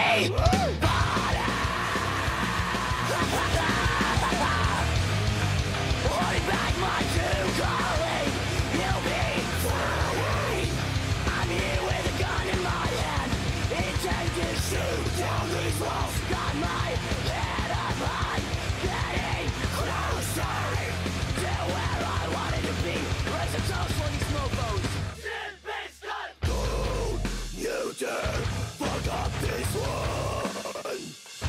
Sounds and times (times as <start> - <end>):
Rhythm and blues: 0.0 - 25.2.